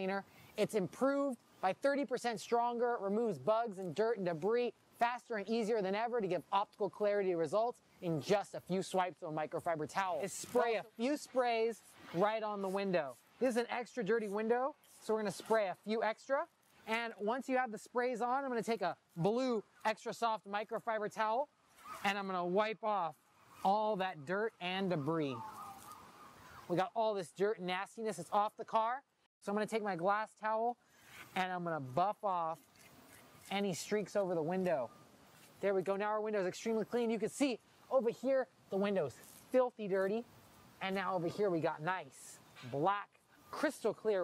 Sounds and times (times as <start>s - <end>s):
Speech: 0.0s - 25.5s, 26.7s - 30.8s, 31.4s - 32.6s, 33.5s - 34.9s, 35.6s - 44.2s.